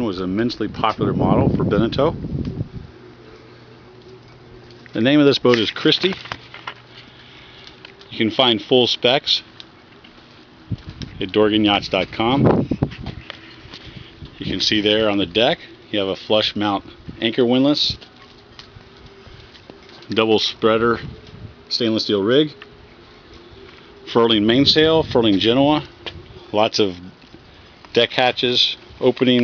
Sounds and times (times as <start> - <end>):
Speech: 0.0 - 2.2, 5.0 - 6.2, 8.1 - 9.5, 11.2 - 12.5, 14.4 - 18.0, 20.1 - 21.1, 21.7 - 22.6, 24.1 - 25.9, 26.5 - 27.2, 27.9 - 29.4.